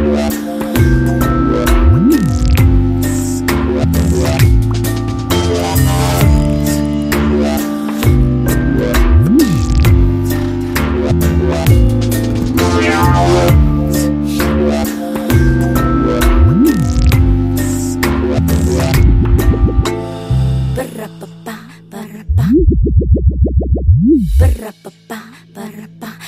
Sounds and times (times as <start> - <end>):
Music: 0.0 - 22.4, 24.3 - 26.2.